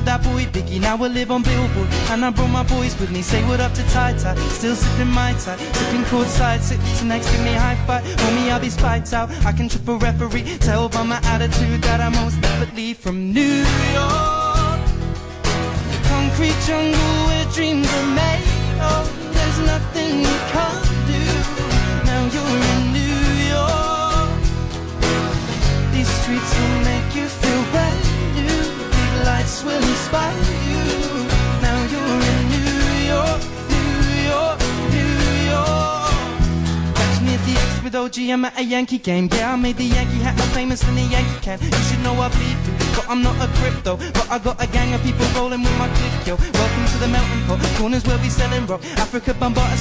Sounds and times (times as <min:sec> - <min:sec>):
Music: 0:00.0 - 0:49.8.